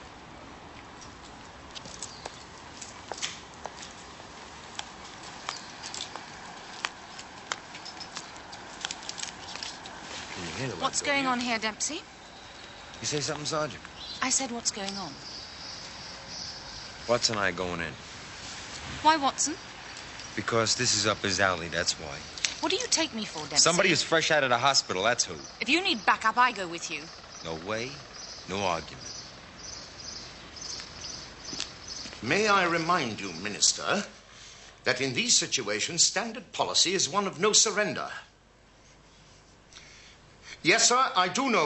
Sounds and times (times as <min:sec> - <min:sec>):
Environmental noise: 0:00.0 - 0:41.6
Bird vocalization, bird call, bird song: 0:12.2 - 0:14.4, 0:15.1 - 0:17.4, 0:27.0 - 0:33.7
Speech: 0:20.4 - 0:29.0.